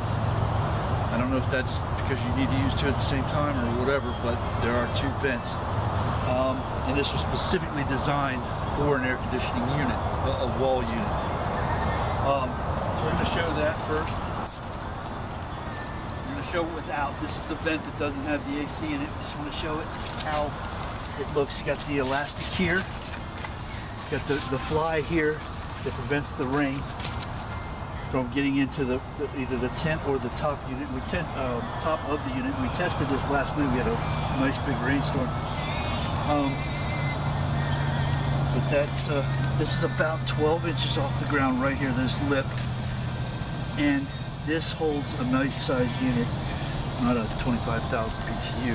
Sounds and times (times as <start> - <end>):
Speech: 1.1 - 5.6, 6.2 - 11.1, 12.2 - 14.2, 16.3 - 20.6, 21.2 - 22.9, 24.1 - 26.8, 28.1 - 37.0, 38.5 - 42.6, 43.8 - 48.7.